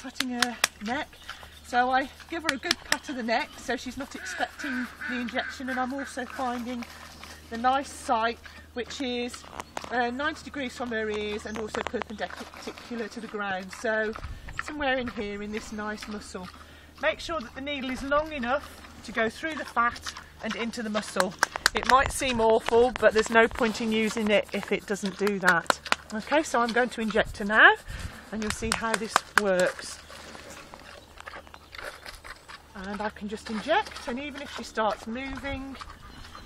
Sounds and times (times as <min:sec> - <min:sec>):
Speech: 0:00.0 - 0:01.1, 0:01.7 - 0:06.9, 0:07.5 - 0:30.0, 0:32.8 - 0:35.8.